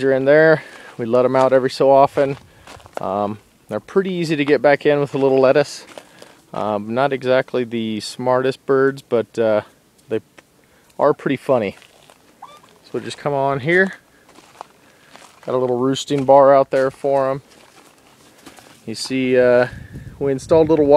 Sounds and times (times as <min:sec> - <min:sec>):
Speech: 0:00.0 - 0:02.4, 0:03.0 - 0:05.9, 0:06.5 - 0:10.2, 0:11.0 - 0:11.8, 0:12.9 - 0:14.0, 0:15.5 - 0:17.4, 0:18.9 - 0:20.9
Bird: 0:12.4 - 0:13.0.